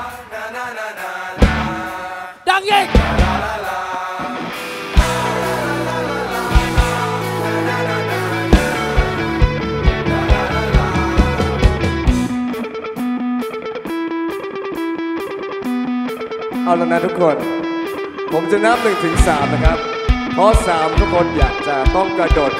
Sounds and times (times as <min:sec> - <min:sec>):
Blues: 0:01.4 - 0:02.0, 0:02.7 - 0:22.5
Rhythm and blues: 0:01.4 - 0:16.6, 0:17.7 - 0:22.5.